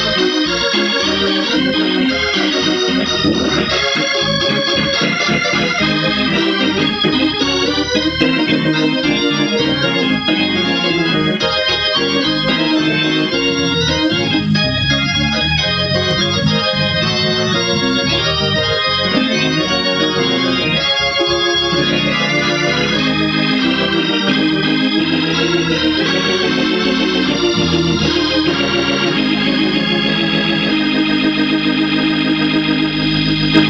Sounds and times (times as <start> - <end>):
Hammond organ: 0.0 - 33.7.